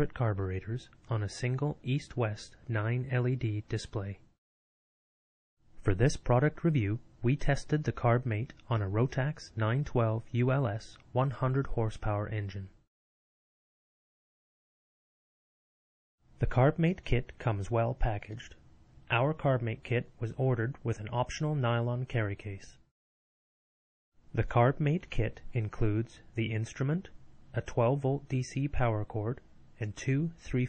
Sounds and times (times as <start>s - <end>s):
Speech: 0.0s - 4.3s, 5.8s - 12.8s, 16.4s - 22.9s, 24.4s - 30.6s.